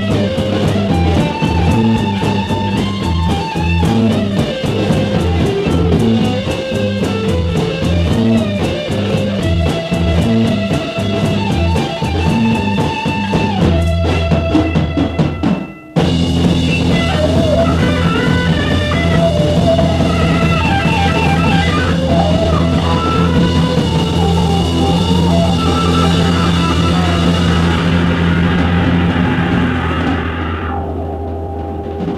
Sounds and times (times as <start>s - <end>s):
Heavy metal: 0.0s - 32.1s
Psychedelic rock: 0.0s - 32.1s.